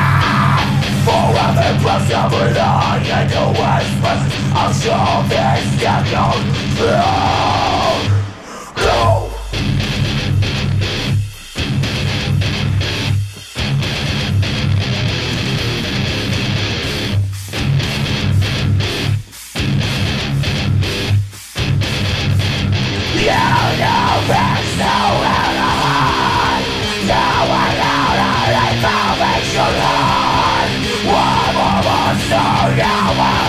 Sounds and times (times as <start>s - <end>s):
Bass guitar: 0.0s - 33.4s
Electric guitar: 0.0s - 33.4s.